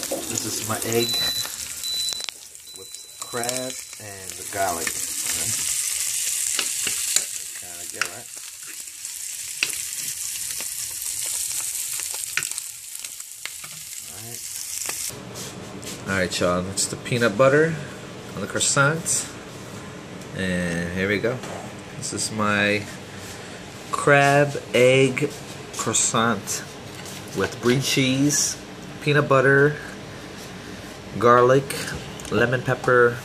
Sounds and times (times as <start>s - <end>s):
Sizzle: 0.0s - 15.2s.